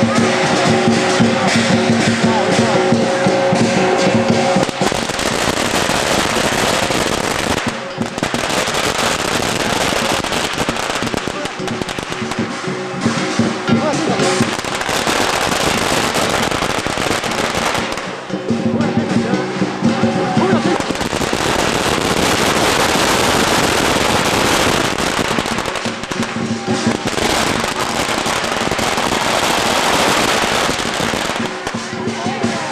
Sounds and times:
Fireworks: 0:00.0 - 0:19.1, 0:19.9 - 0:32.7
Music: 0:00.0 - 0:32.7.

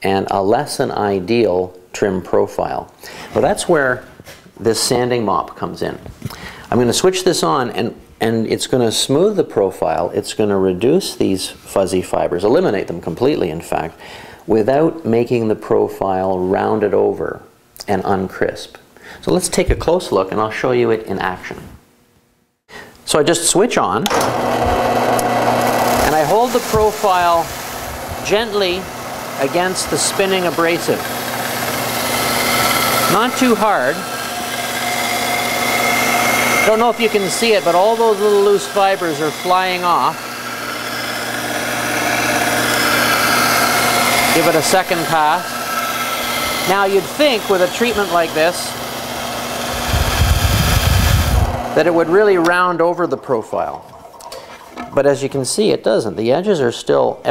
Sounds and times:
Power tool: 0:24.0 - 0:52.7.

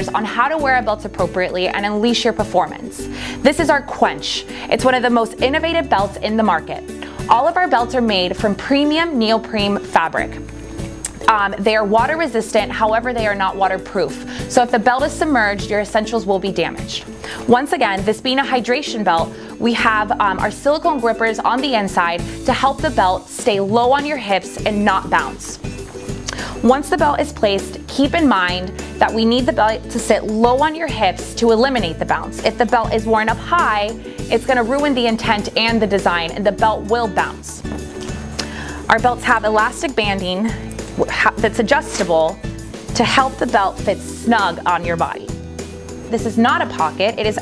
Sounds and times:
Speech: 0:00.0 - 0:10.3, 0:11.2 - 0:25.6, 0:26.6 - 0:37.6, 0:38.9 - 0:42.4, 0:43.0 - 0:45.3, 0:46.1 - 0:47.4
Music: 0:00.0 - 0:47.4.

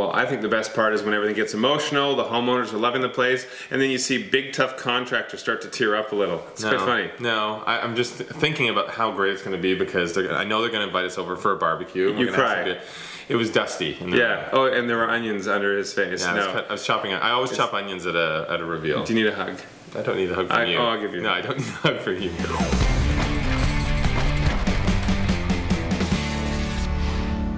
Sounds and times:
Speech: 0:00.0 - 0:22.7
Music: 0:22.2 - 0:27.5.

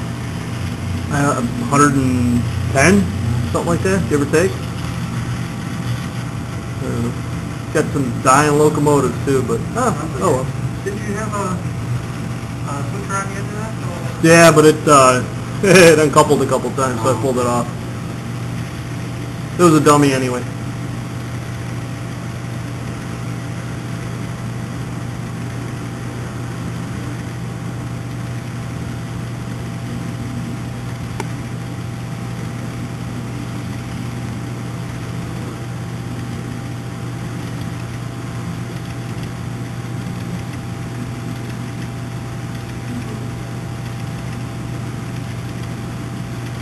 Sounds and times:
Speech: 0:01.1 - 0:04.6, 0:06.8 - 0:07.2, 0:07.8 - 0:11.7, 0:12.6 - 0:17.8, 0:19.6 - 0:20.5.

